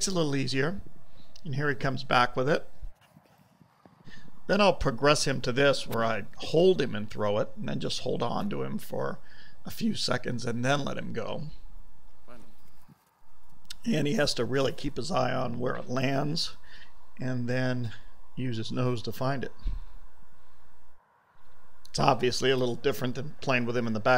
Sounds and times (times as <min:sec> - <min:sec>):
Speech: 0:00.0 - 0:00.8, 0:01.4 - 0:02.7, 0:04.5 - 0:11.6, 0:13.7 - 0:16.6, 0:17.2 - 0:19.6, 0:21.9 - 0:24.1.